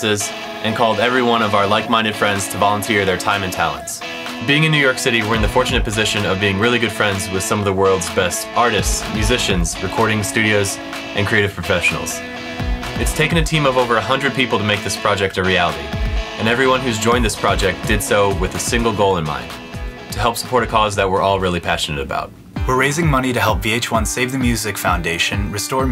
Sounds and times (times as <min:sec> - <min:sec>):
Speech: 0:00.0 - 0:12.2, 0:13.0 - 0:25.9
Music: 0:00.0 - 0:25.9.